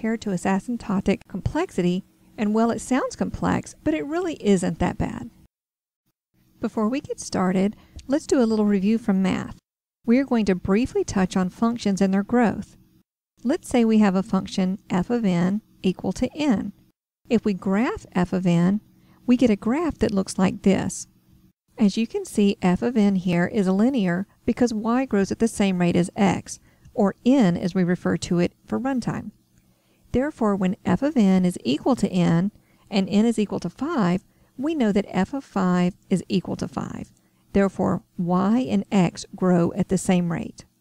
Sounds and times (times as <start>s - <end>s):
Speech: 0.0s - 5.4s, 6.6s - 12.8s, 13.4s - 21.1s, 21.8s - 29.4s, 30.1s - 40.7s.